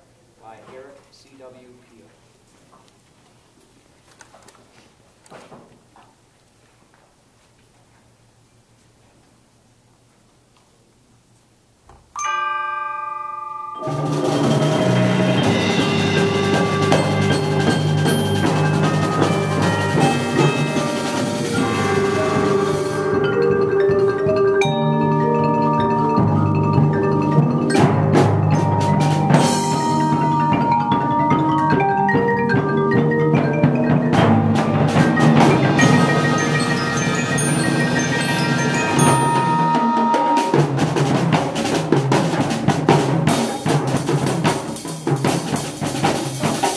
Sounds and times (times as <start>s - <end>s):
Glockenspiel: 12.2s - 40.6s
Marimba, xylophone: 12.2s - 40.8s.